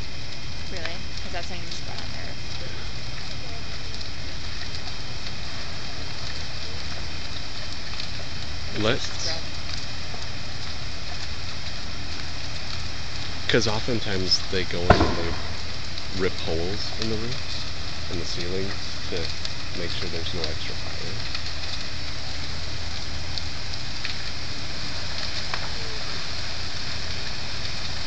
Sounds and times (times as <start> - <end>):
Fire: 0.0 - 28.0
Speech: 0.7 - 3.7, 8.8 - 9.5, 13.5 - 15.6, 16.2 - 21.2.